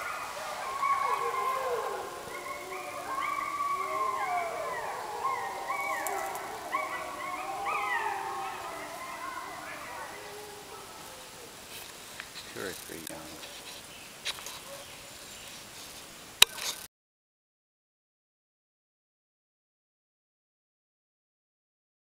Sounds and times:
Speech: 12.5 - 13.4.

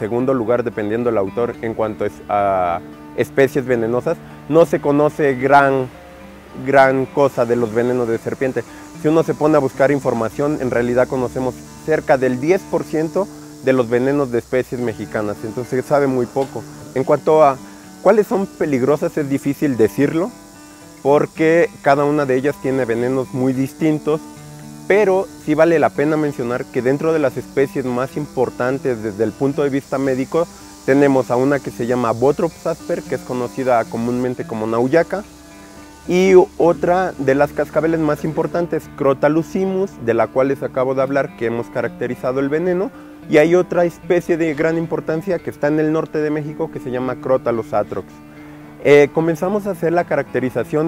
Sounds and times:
Speech: 0.0 - 5.9, 6.6 - 20.3, 21.0 - 24.2, 24.9 - 35.3, 36.1 - 48.2, 48.8 - 50.8
Music: 0.0 - 50.8
Snake: 3.4 - 50.8.

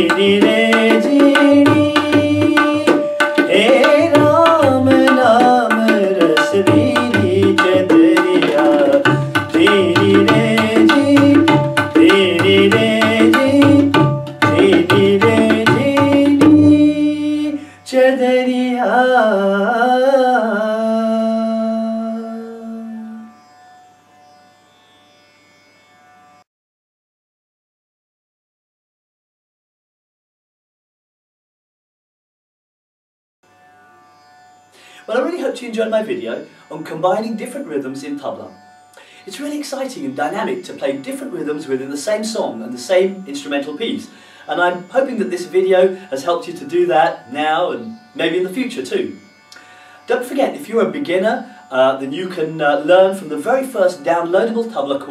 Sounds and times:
Tabla: 0.0 - 17.6.

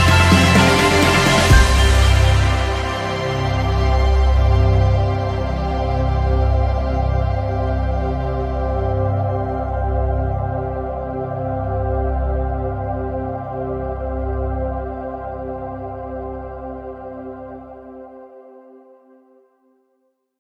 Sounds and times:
New-age music: 0.0 - 18.4.

